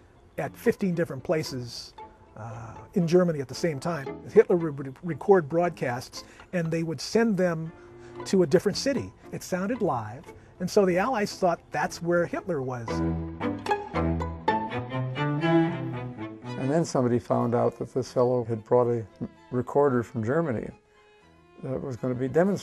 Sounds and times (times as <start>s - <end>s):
Music: 0.0s - 22.6s
Speech: 0.4s - 7.7s, 8.3s - 13.0s, 16.6s - 20.8s, 21.6s - 22.6s.